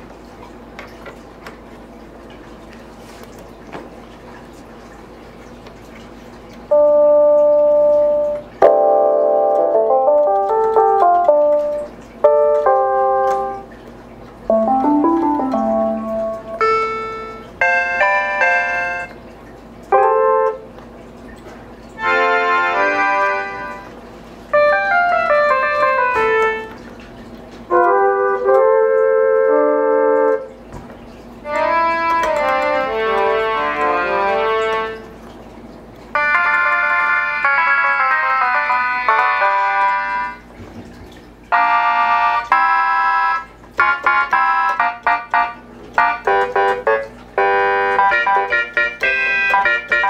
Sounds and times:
Music: 6.8s - 13.6s, 14.5s - 19.2s, 22.0s - 24.0s, 24.6s - 26.7s, 27.7s - 30.5s, 31.5s - 35.1s, 36.2s - 40.4s, 41.6s - 50.1s.

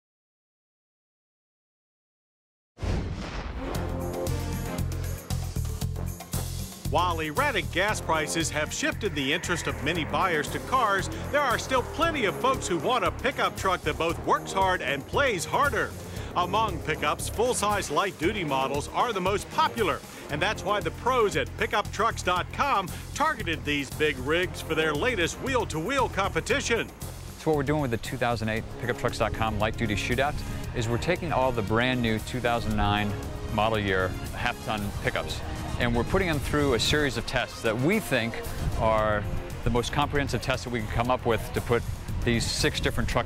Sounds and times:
Music: 2.8s - 43.2s
Speech: 6.9s - 43.2s.

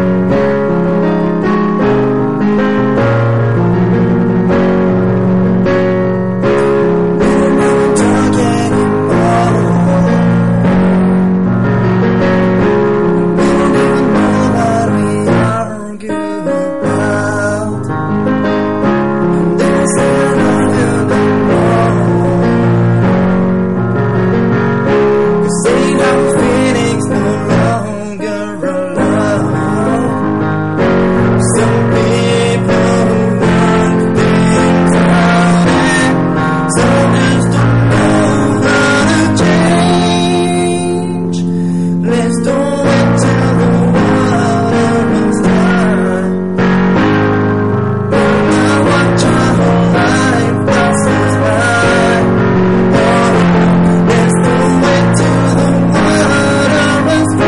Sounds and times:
Music: 0.0s - 57.4s.

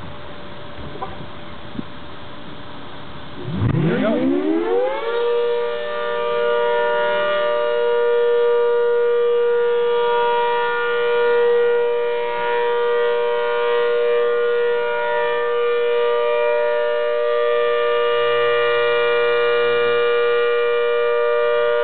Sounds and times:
Civil defense siren: 3.4s - 21.8s.

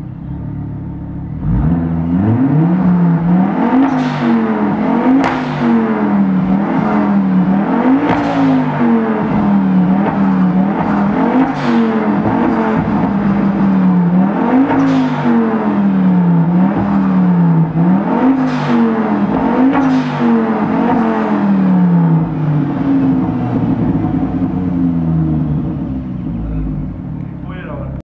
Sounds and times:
Outside, urban or manmade: 0.0s - 28.0s.

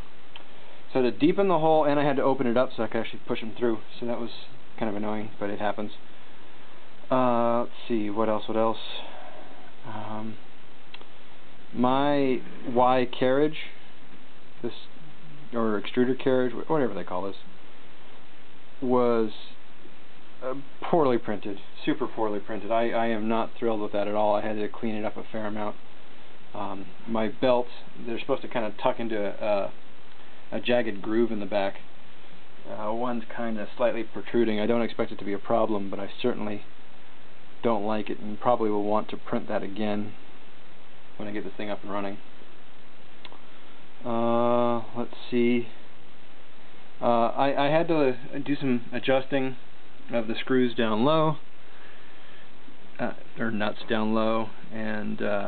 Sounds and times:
Inside, small room: 0.0s - 55.4s
Speech: 0.9s - 6.1s, 7.1s - 10.4s, 11.7s - 13.8s, 14.6s - 17.5s, 18.8s - 19.6s, 20.4s - 25.8s, 26.5s - 29.8s, 30.5s - 31.9s, 32.6s - 36.7s, 37.6s - 40.2s, 41.2s - 42.3s, 44.0s - 45.8s, 47.0s - 51.5s, 53.0s - 55.4s.

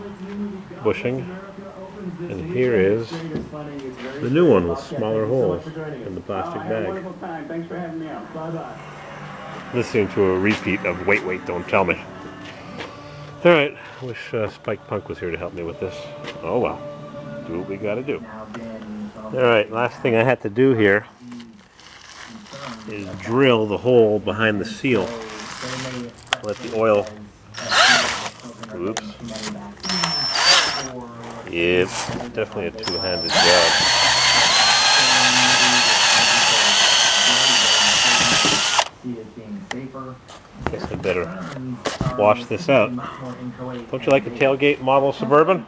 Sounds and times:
Speech: 0.0s - 12.4s, 13.4s - 16.8s, 17.4s - 21.6s, 22.2s - 45.6s.

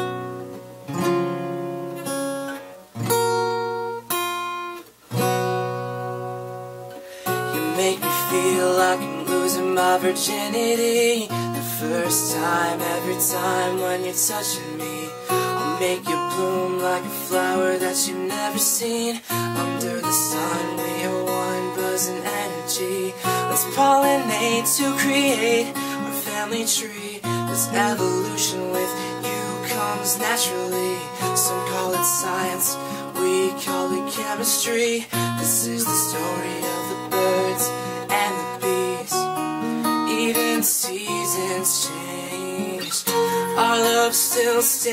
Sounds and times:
Music: 0.0s - 44.9s.

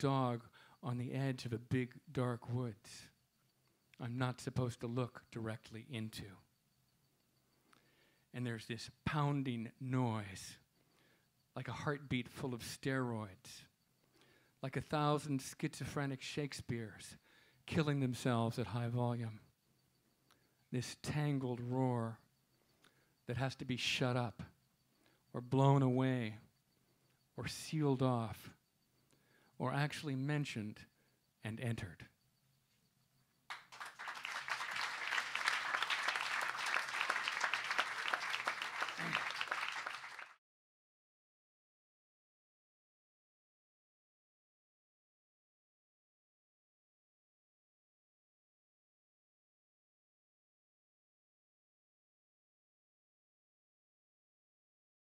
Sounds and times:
Speech: 0.0s - 3.2s, 4.0s - 6.4s, 8.4s - 10.6s, 11.6s - 13.7s, 14.6s - 19.5s, 20.7s - 22.2s, 23.3s - 24.5s, 25.4s - 26.5s, 27.4s - 28.6s, 29.6s - 32.1s.

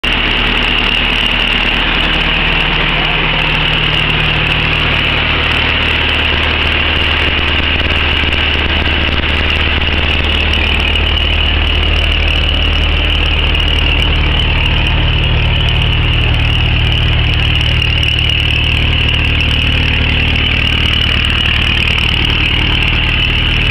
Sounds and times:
Car: 0.0s - 23.7s
Engine: 0.0s - 23.7s
Outside, urban or manmade: 0.0s - 23.7s.

